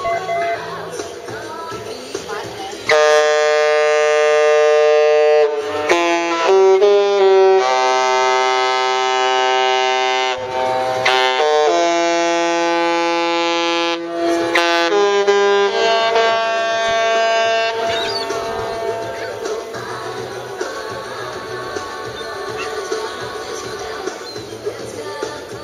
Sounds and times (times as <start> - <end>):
Music: 0.0 - 9.3, 10.5 - 25.6.